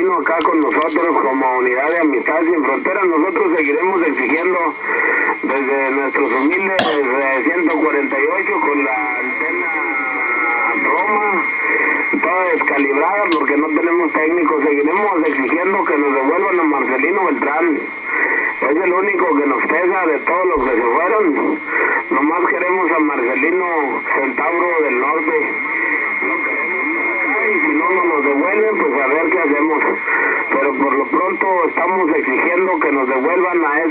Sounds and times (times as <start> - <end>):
Speech: 0.0 - 11.5, 12.1 - 17.9, 18.6 - 25.6, 26.7 - 33.9
Radio: 0.0 - 33.9.